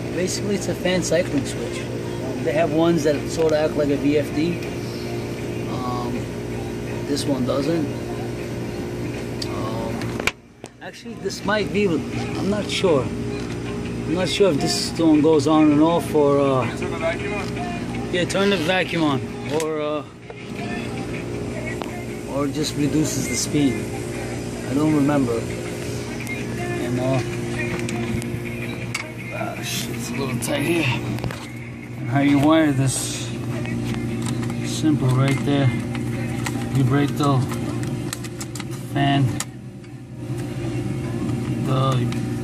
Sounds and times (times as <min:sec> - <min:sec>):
Music: 0:00.0 - 0:42.4.